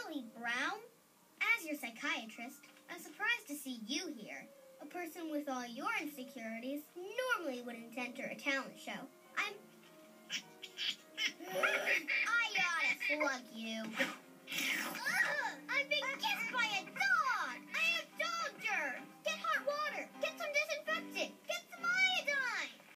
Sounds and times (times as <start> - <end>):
Music: 0.0 - 22.9.